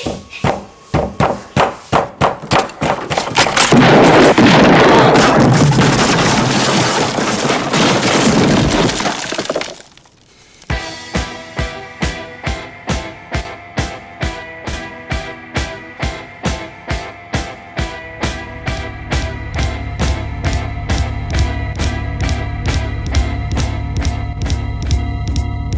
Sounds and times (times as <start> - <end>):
Music: 0.0 - 2.2, 10.7 - 25.7.